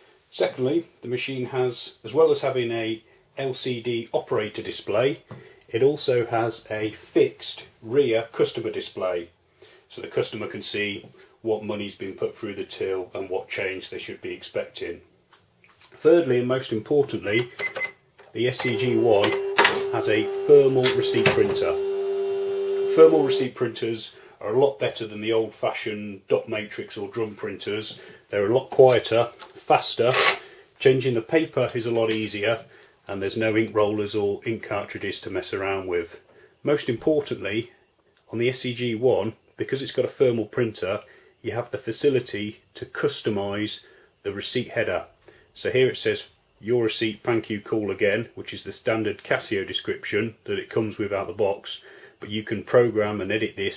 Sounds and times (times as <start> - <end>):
Speech: 0.3 - 9.3, 9.9 - 15.1, 15.8 - 17.6, 18.3 - 21.9, 22.9 - 53.7.